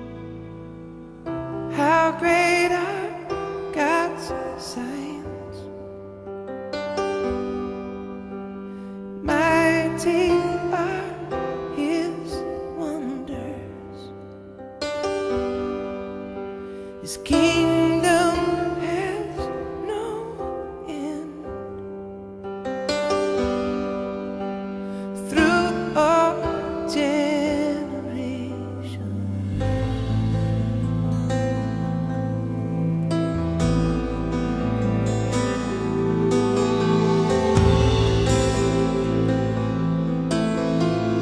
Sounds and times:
Music: 0.0s - 41.2s.

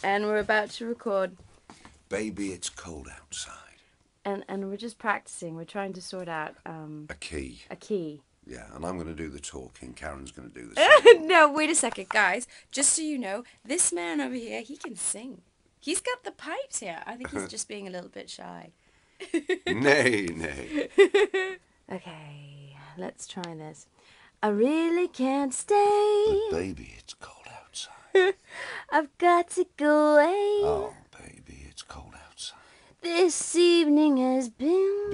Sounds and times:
Speech: 2.1s - 3.6s, 8.5s - 12.2s, 16.9s - 17.8s, 19.7s - 20.7s, 26.4s - 27.2s, 30.6s - 32.1s.

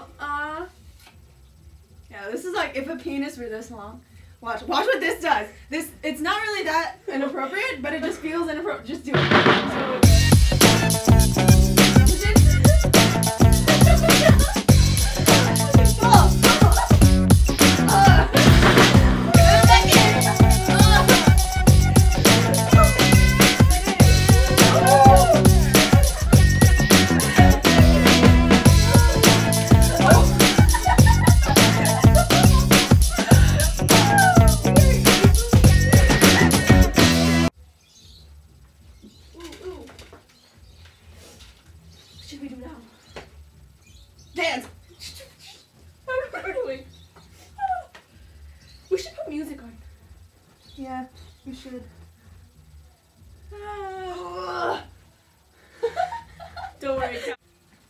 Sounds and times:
Music: 9.1s - 37.6s.

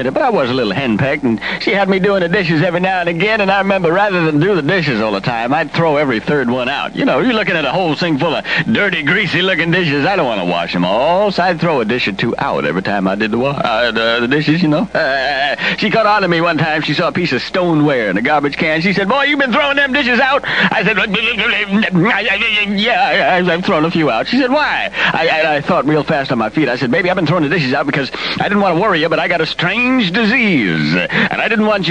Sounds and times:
Speech: 0.0s - 31.9s.

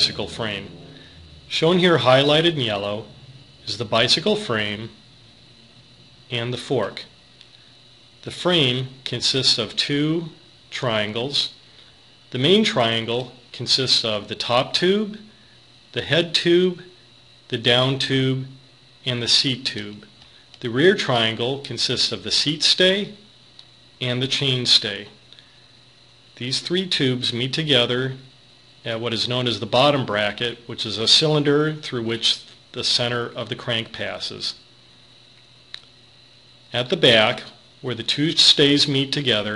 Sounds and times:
Speech: 0.0s - 5.0s, 6.3s - 7.2s, 8.2s - 11.6s, 12.3s - 15.3s, 15.9s - 23.3s, 24.0s - 25.2s, 26.4s - 34.7s, 36.7s - 39.5s.

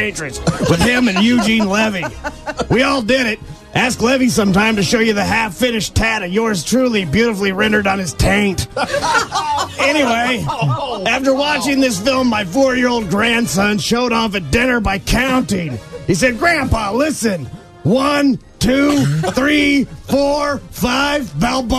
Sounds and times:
Music: 0.0s - 21.7s
Speech: 0.0s - 21.7s.

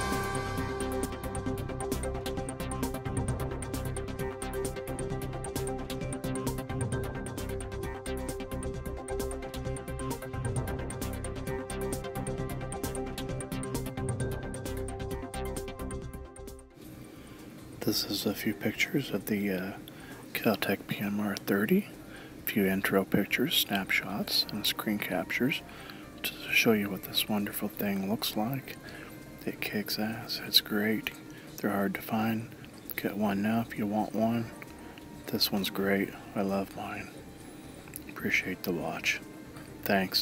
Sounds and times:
Speech: 17.8s - 21.9s, 22.5s - 25.6s, 26.2s - 28.8s, 29.4s - 34.6s, 35.3s - 37.1s, 38.1s - 39.2s, 39.8s - 40.2s.

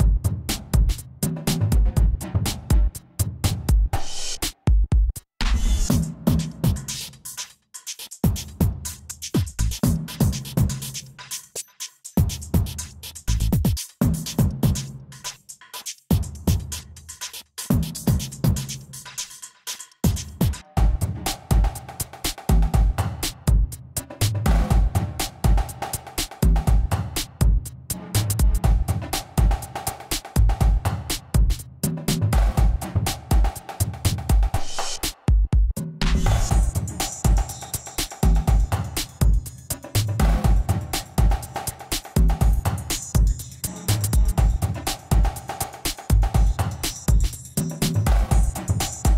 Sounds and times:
Music: 0.0s - 49.1s.

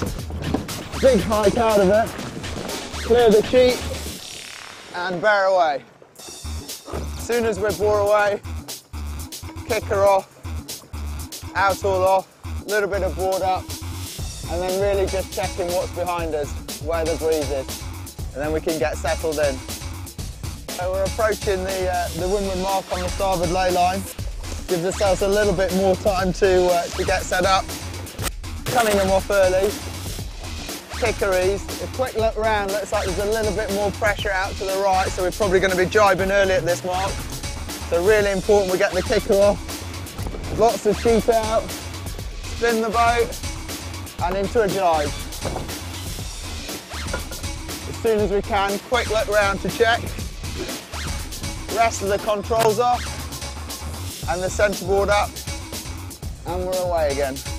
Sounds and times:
Music: 0.0s - 57.5s
Speech: 1.0s - 2.1s, 3.1s - 3.8s, 5.0s - 5.8s, 7.2s - 8.4s, 9.7s - 10.3s, 11.6s - 13.6s, 14.5s - 17.7s, 18.4s - 19.6s, 20.7s - 24.1s, 24.7s - 27.6s, 28.7s - 29.8s, 31.0s - 37.2s, 37.9s - 39.6s, 40.5s - 41.7s, 42.6s - 43.3s, 44.2s - 45.2s, 47.9s - 50.1s, 51.7s - 53.0s, 54.3s - 55.3s, 56.4s - 57.4s.

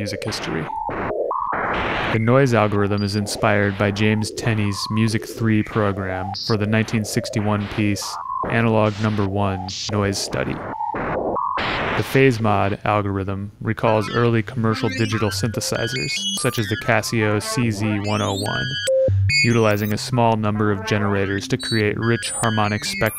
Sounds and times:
Speech: 0.0s - 0.7s, 2.1s - 10.6s, 12.0s - 18.8s, 19.4s - 23.1s.

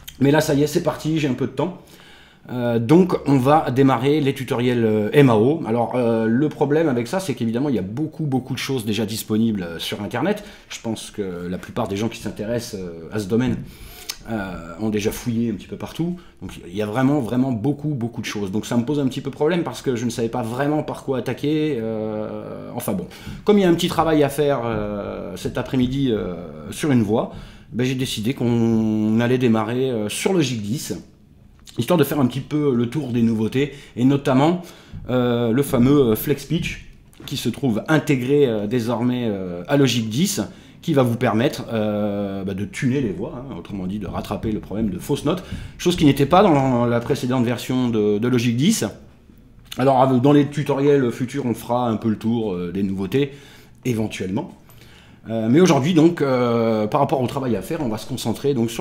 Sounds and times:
Speech: 0.1s - 1.8s, 2.5s - 31.1s, 31.7s - 49.1s, 49.7s - 54.6s, 55.2s - 58.8s.

